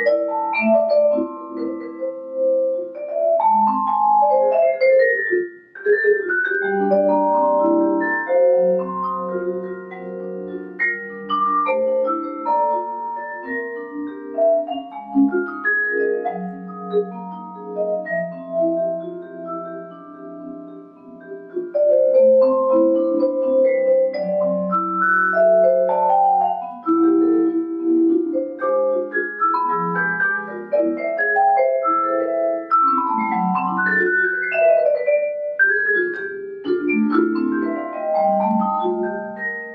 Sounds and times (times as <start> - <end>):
Glockenspiel: 0.0 - 39.7
Marimba, xylophone: 0.0 - 39.7.